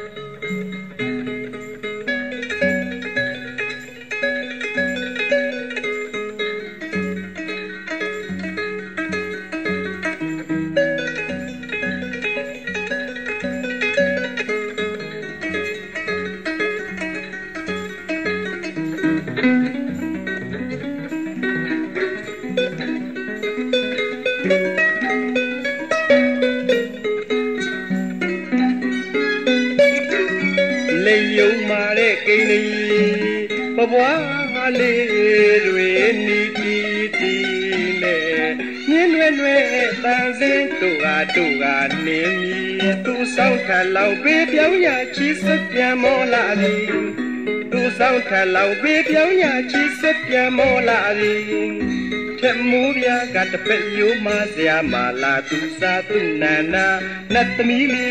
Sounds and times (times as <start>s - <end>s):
Harp: 0.0s - 58.1s.